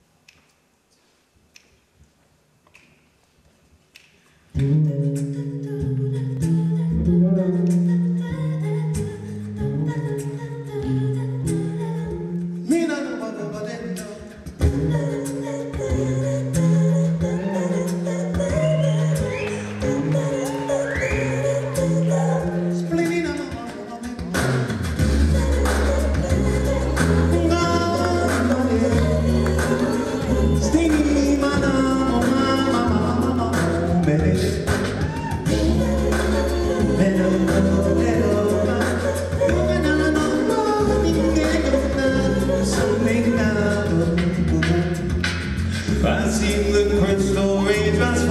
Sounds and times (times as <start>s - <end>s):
Music: 3.7s - 48.3s
Singing: 5.2s - 45.1s, 45.9s - 48.3s.